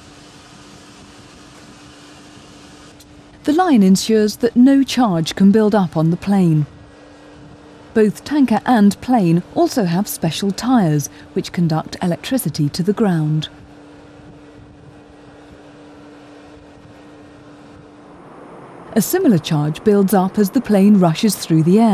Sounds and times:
Speech: 3.5s - 6.7s, 8.0s - 13.5s, 19.0s - 21.9s.

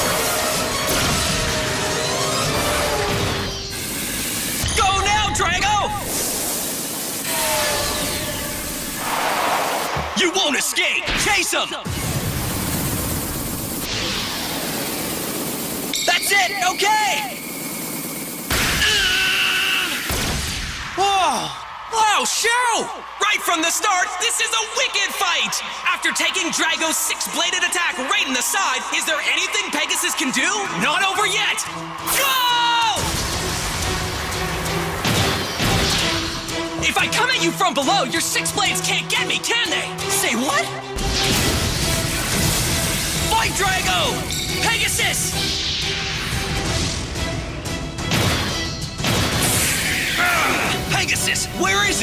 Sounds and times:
Speech: 4.7s - 6.0s, 10.2s - 11.9s, 16.1s - 17.4s, 21.0s - 33.0s, 36.8s - 40.8s, 43.3s - 45.3s, 50.2s - 52.0s.

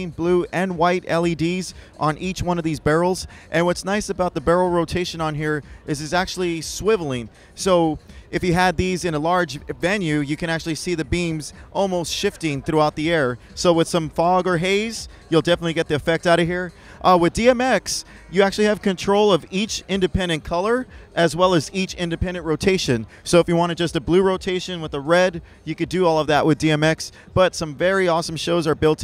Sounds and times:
Music: 0.0s - 29.0s
Speech: 0.0s - 29.0s.

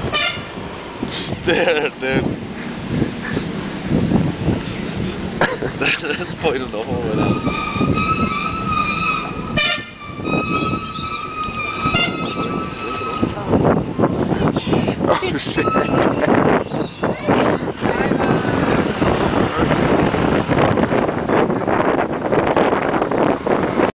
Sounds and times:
Vehicle: 0.0s - 23.9s.

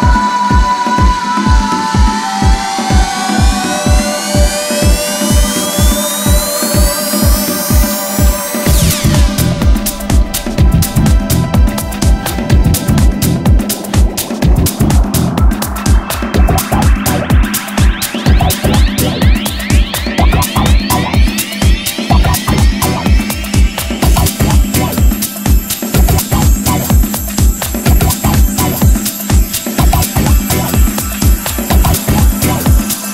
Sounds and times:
Music: 0.0s - 33.1s.

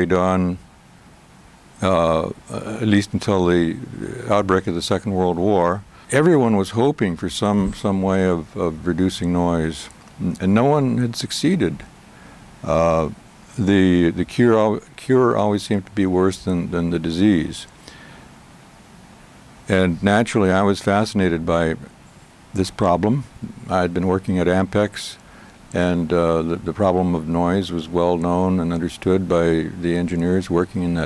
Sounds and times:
Speech: 0.0s - 0.6s, 1.8s - 11.9s, 12.6s - 17.7s, 19.7s - 21.9s, 22.6s - 25.2s, 25.8s - 31.0s.

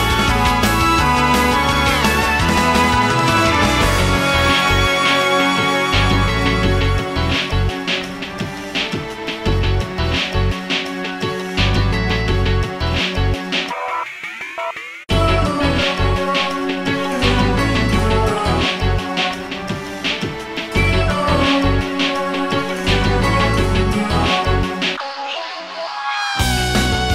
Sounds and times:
Video game music: 0.0s - 25.0s, 26.4s - 27.1s
Soundtrack music: 0.0s - 27.1s.

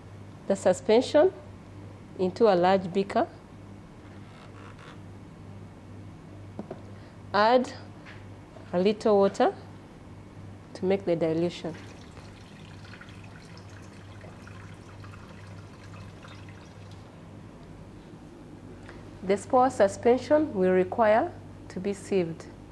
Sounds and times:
Speech: 0.5s - 1.5s, 2.2s - 3.4s, 7.4s - 7.9s, 8.7s - 9.7s, 10.8s - 11.8s, 19.2s - 22.6s.

